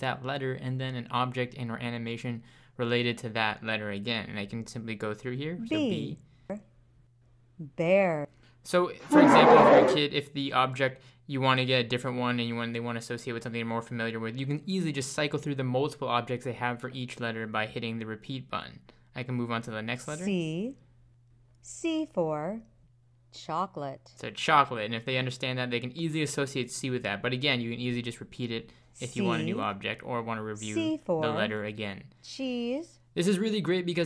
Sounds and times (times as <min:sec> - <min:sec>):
Speech: 0:00.0 - 0:06.6, 0:07.6 - 0:20.8, 0:23.4 - 0:34.0.